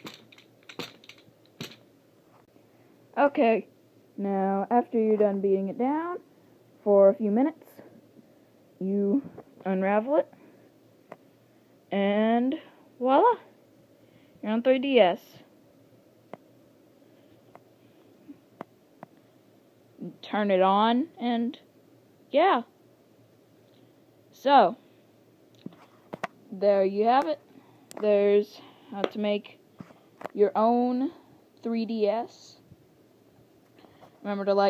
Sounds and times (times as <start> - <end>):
Inside, small room: 0.0 - 34.6
Speech: 3.2 - 6.2, 6.8 - 7.9, 8.8 - 10.3, 11.9 - 13.5, 14.4 - 15.5, 20.0 - 21.6, 22.3 - 22.7, 26.5 - 27.4, 28.0 - 29.6, 30.4 - 32.6, 34.2 - 34.6.